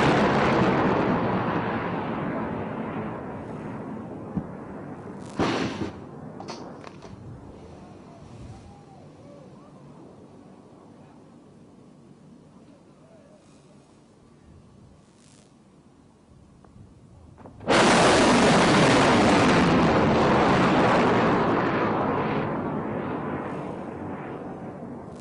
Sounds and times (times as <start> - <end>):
Speech: 7.7 - 11.4, 12.5 - 13.9.